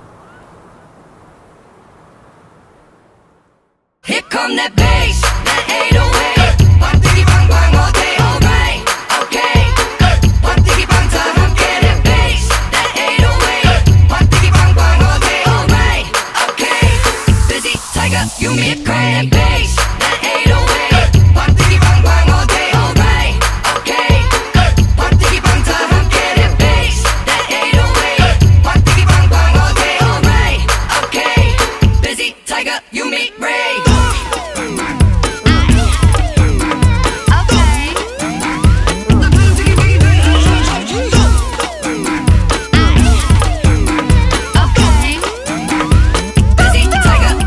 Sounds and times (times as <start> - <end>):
Music: 4.1 - 47.4.